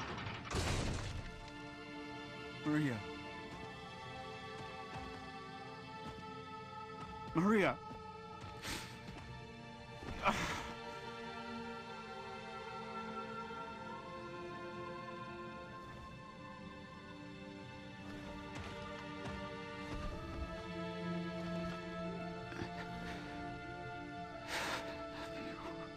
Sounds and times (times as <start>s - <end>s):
Music: 0.0s - 25.9s
Speech: 2.6s - 3.0s, 7.4s - 7.8s.